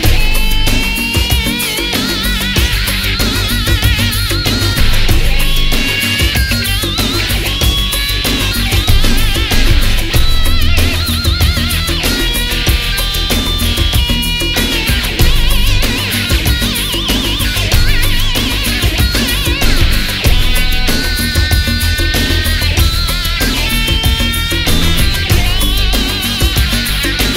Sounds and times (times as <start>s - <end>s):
Music: 0.0s - 27.3s.